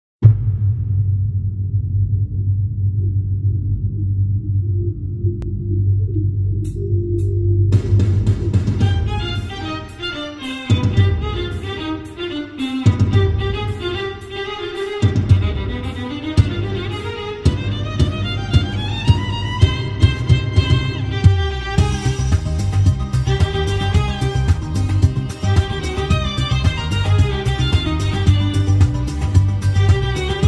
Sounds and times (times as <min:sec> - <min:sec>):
Violin, fiddle: 0:08.8 - 0:30.4.